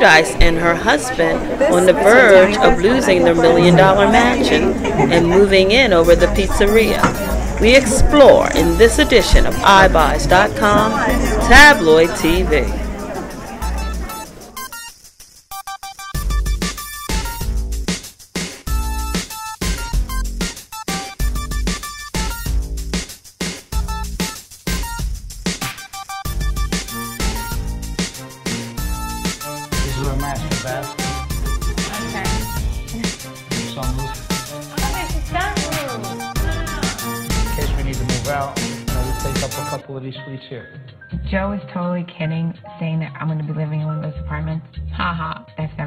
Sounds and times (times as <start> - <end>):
Music: 0.0 - 45.8.